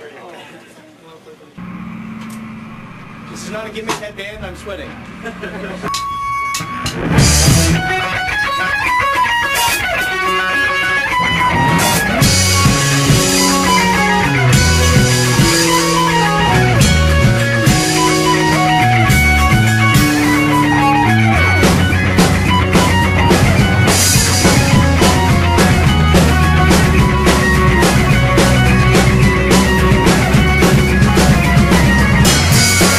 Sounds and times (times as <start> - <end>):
Music: 5.8 - 32.9.